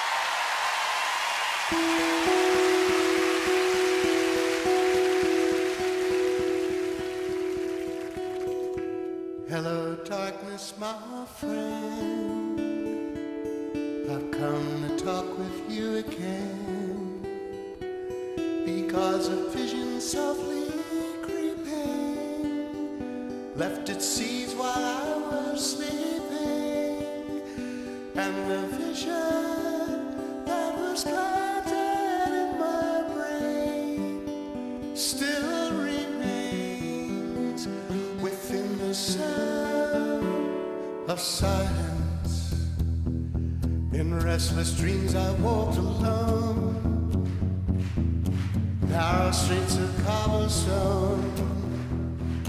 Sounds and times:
Music: 0.0s - 52.4s.

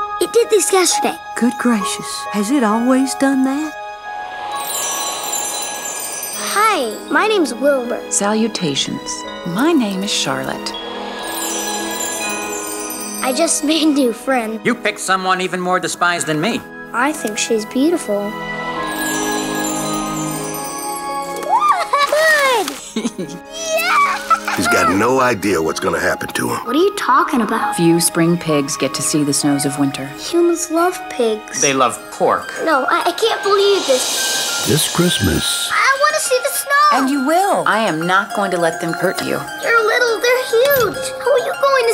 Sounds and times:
Music: 0.0s - 41.9s.

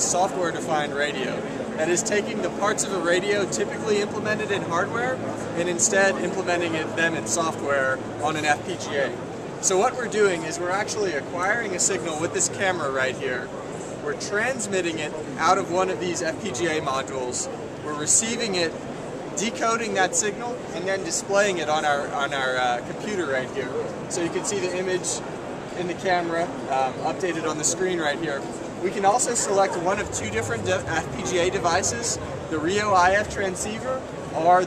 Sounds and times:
Speech: 0.0s - 18.7s, 19.4s - 25.2s, 25.8s - 34.6s.

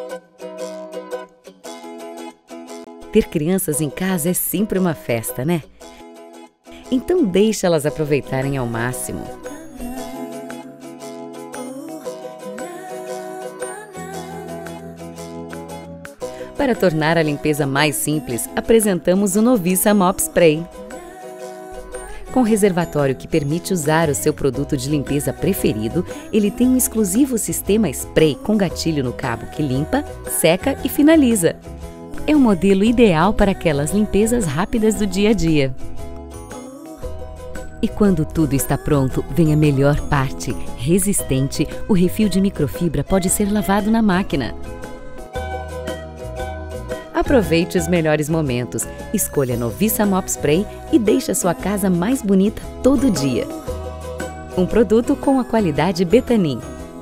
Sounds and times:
Music: 0.0s - 57.0s
Speech: 3.1s - 5.6s, 6.8s - 9.4s, 16.6s - 20.7s, 22.3s - 31.6s, 32.2s - 35.8s, 37.8s - 44.6s, 47.2s - 53.6s, 54.6s - 56.6s.

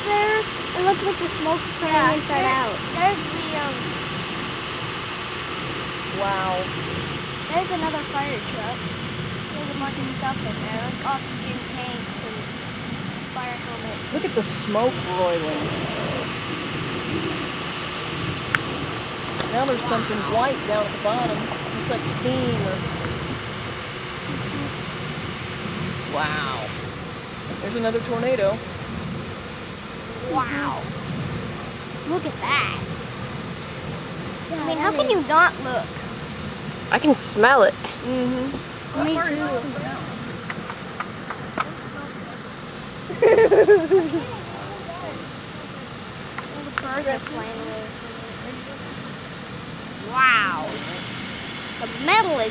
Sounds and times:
Speech: 0.0s - 3.8s, 6.1s - 6.8s, 7.5s - 8.8s, 9.5s - 12.5s, 13.4s - 16.4s, 19.4s - 23.2s, 26.1s - 26.8s, 34.5s - 36.0s, 36.9s - 40.3s, 46.4s - 49.0s, 51.8s - 52.5s.

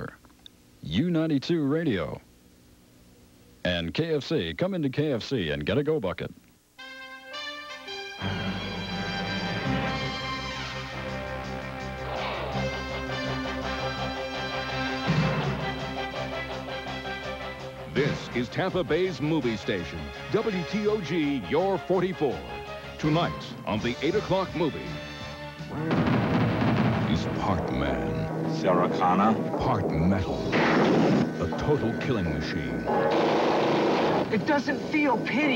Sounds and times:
Speech: 0.8s - 2.3s, 3.6s - 6.4s, 17.9s - 22.4s, 23.0s - 25.0s, 27.1s - 30.6s, 31.4s - 32.9s, 34.3s - 35.5s
Music: 6.8s - 33.6s.

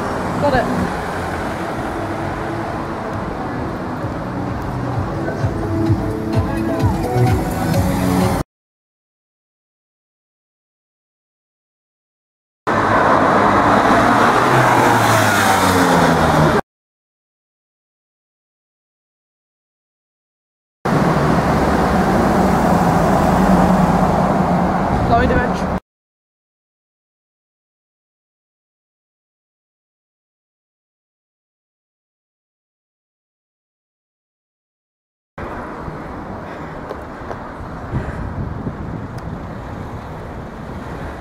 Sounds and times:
Car: 0.0s - 8.4s, 12.7s - 16.6s, 20.9s - 25.8s, 35.4s - 41.2s
Outside, urban or manmade: 0.0s - 8.5s, 12.7s - 16.7s, 20.8s - 25.8s, 35.4s - 41.2s.

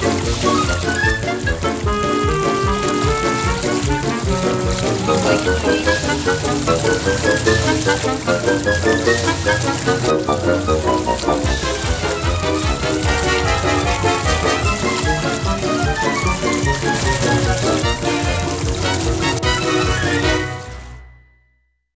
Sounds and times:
Music: 0.0s - 21.8s.

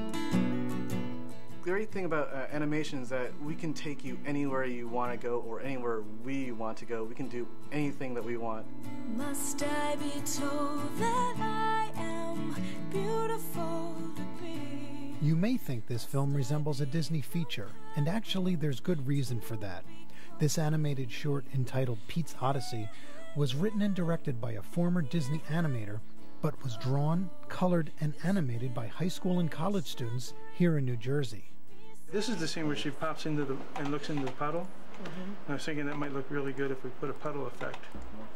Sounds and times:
Background music: 0.0s - 38.3s
Speech: 1.7s - 8.6s, 15.2s - 19.8s, 20.4s - 31.4s, 32.2s - 38.3s.

